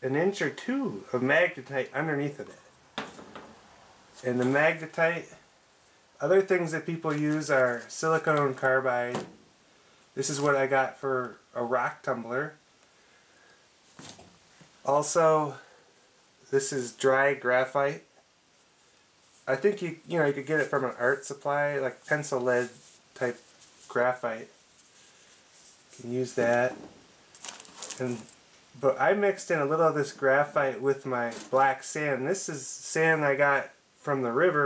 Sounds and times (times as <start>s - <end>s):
Speech: 0.0s - 2.6s, 4.2s - 5.4s, 6.2s - 9.3s, 10.2s - 12.6s, 14.8s - 15.7s, 16.5s - 18.1s, 19.5s - 24.6s, 26.0s - 26.9s, 28.0s - 34.6s.